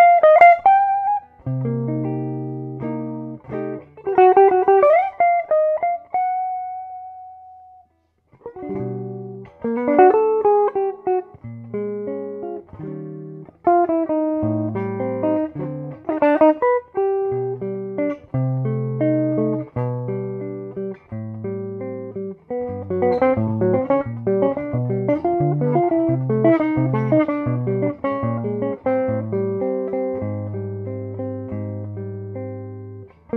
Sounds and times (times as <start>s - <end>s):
Guitar: 0.0s - 33.3s.